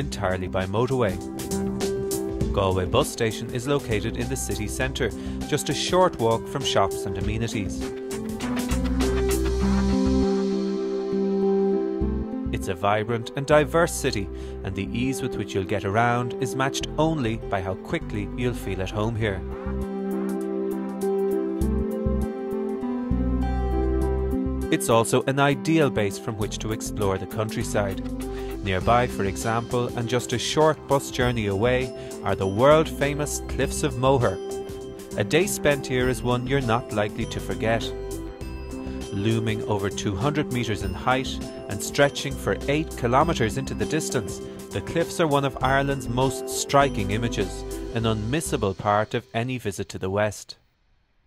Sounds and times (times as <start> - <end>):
Speech: 0.0 - 1.2, 2.5 - 7.9, 12.5 - 19.5, 24.7 - 28.0, 28.6 - 34.4, 35.2 - 38.0, 39.1 - 50.6
Music: 0.0 - 50.1.